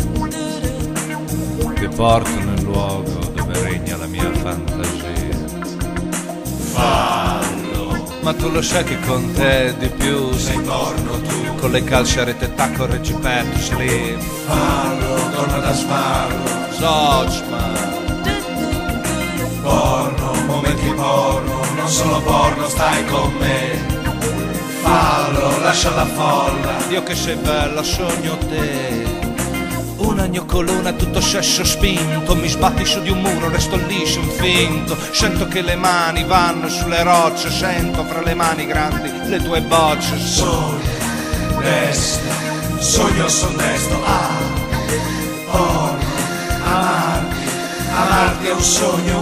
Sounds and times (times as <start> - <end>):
Music: 0.0 - 49.2.